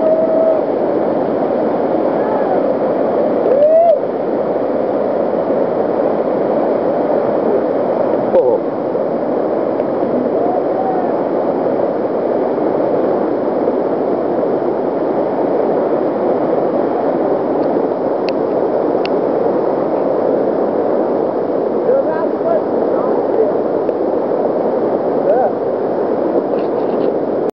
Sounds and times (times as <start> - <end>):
Speech: 8.4 - 8.6, 21.8 - 23.6, 25.3 - 25.6.